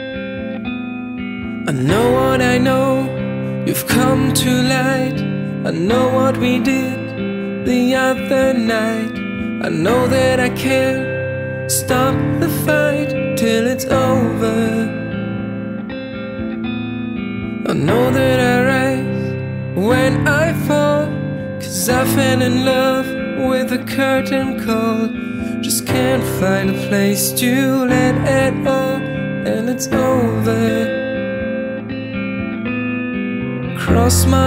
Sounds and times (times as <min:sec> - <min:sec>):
Guitar: 0:00.0 - 0:34.4.